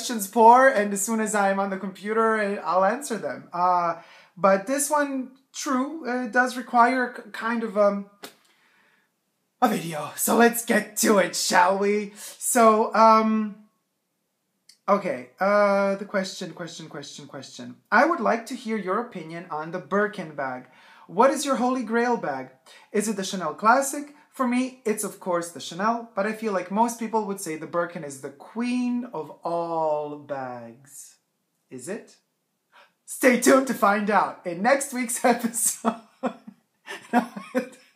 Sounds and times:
Speech: 0.0s - 8.3s, 9.6s - 13.6s, 14.7s - 32.3s, 33.1s - 37.8s
Inside, small room: 0.0s - 37.9s.

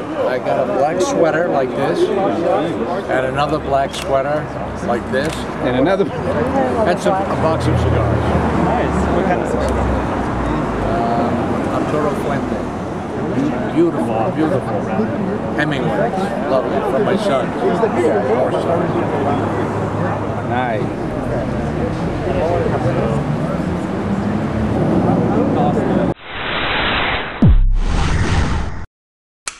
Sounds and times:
Speech: 0.0s - 12.6s, 13.3s - 23.9s, 24.9s - 26.2s
Hubbub, speech noise, speech babble: 0.0s - 26.2s
Outside, urban or manmade: 0.0s - 28.9s.

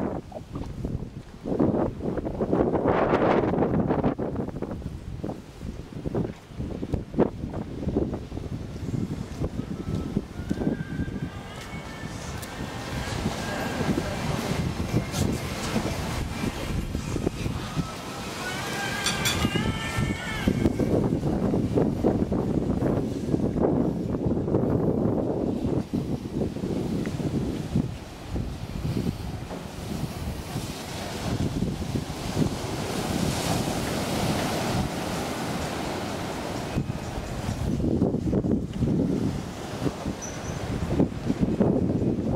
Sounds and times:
Wind noise (microphone): 0.0s - 18.0s, 19.0s - 42.3s
Waves, surf: 0.0s - 42.3s.

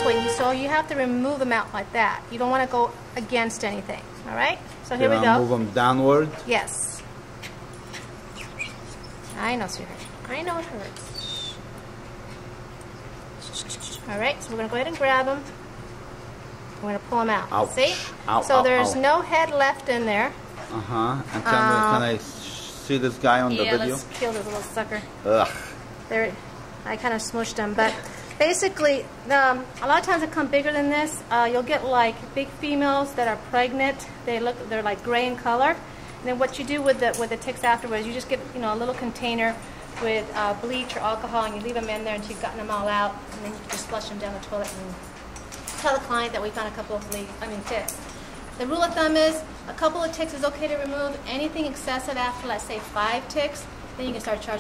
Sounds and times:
Speech: 4.3s - 6.0s, 17.8s - 22.3s, 22.9s - 24.6s.

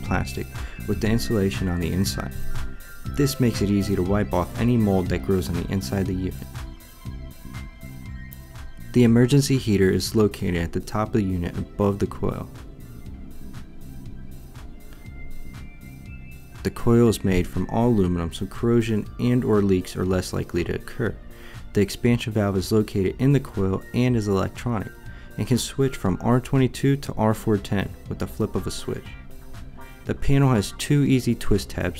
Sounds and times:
Speech: 0.0s - 2.4s, 3.2s - 6.5s, 8.9s - 12.5s, 16.6s - 29.2s, 30.1s - 31.9s
Music: 0.0s - 31.9s.

